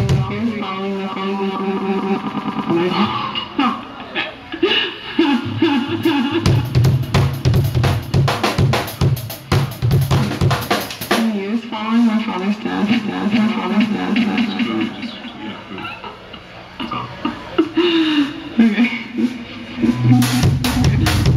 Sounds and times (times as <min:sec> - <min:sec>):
Speech: 0:00.0 - 0:04.6, 0:11.2 - 0:16.0
Rhythm and blues: 0:00.0 - 0:21.3
Jazz: 0:05.4 - 0:17.2
Pop music: 0:12.4 - 0:15.4.